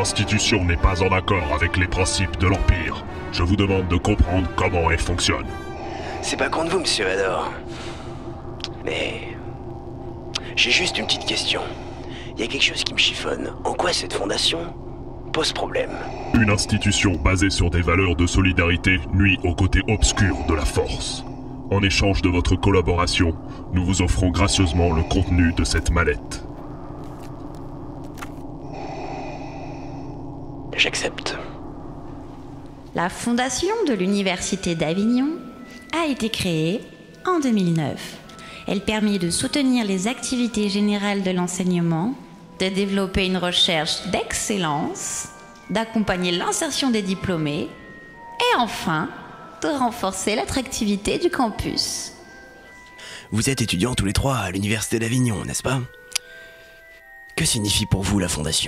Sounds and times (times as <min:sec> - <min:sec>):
Speech: 0:00.0 - 0:05.5, 0:06.2 - 0:07.6, 0:10.4 - 0:11.8, 0:12.4 - 0:14.7, 0:15.4 - 0:26.4, 0:30.8 - 0:31.5, 0:53.3 - 0:55.9, 0:57.4 - 0:58.6.